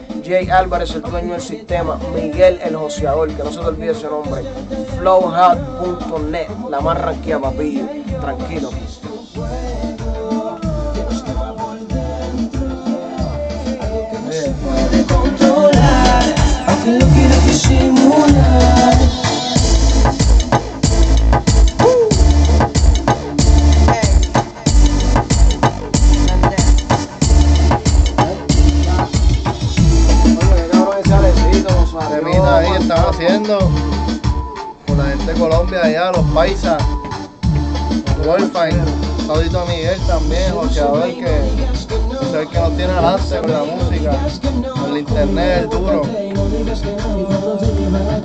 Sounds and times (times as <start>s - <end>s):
Music: 0.0s - 48.2s.